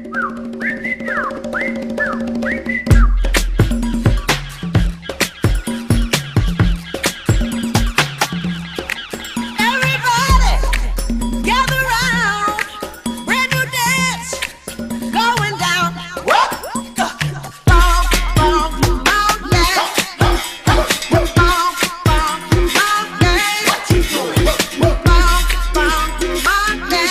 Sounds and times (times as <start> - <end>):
Music of Africa: 0.0 - 27.1.